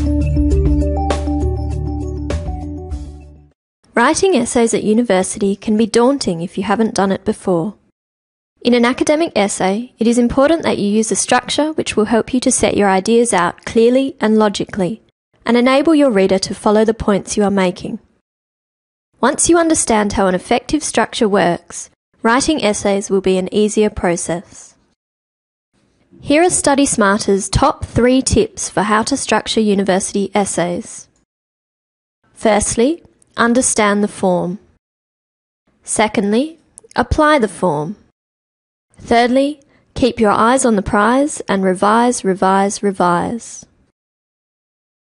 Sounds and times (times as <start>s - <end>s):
Speech: 4.0s - 7.8s, 8.6s - 18.1s, 19.2s - 24.8s, 26.2s - 31.2s, 32.4s - 34.7s, 35.9s - 38.0s, 39.0s - 43.7s.